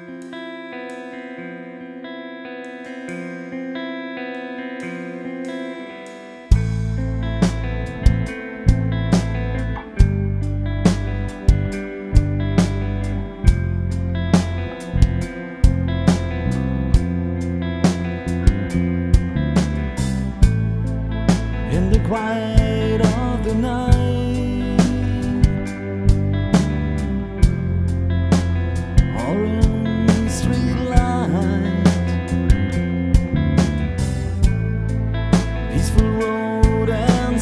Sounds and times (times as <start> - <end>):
Music: 0.0 - 37.4.